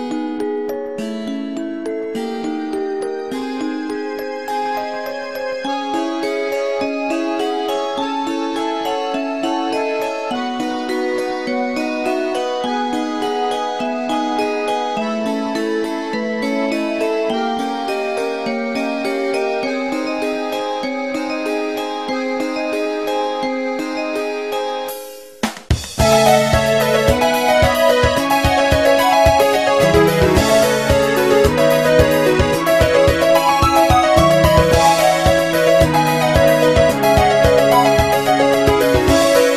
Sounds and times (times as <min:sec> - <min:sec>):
Video game music: 0:22.8 - 0:39.5.